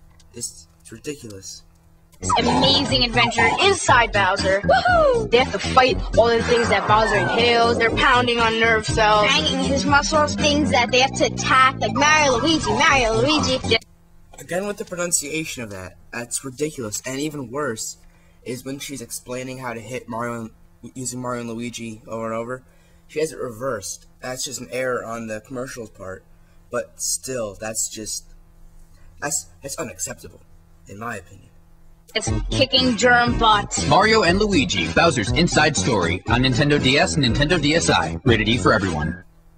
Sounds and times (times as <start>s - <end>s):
Speech: 0.4s - 1.6s, 2.2s - 13.8s, 14.4s - 26.2s, 26.8s - 28.2s, 29.2s - 31.5s, 32.1s - 39.2s
Music: 2.2s - 13.8s, 32.1s - 39.3s.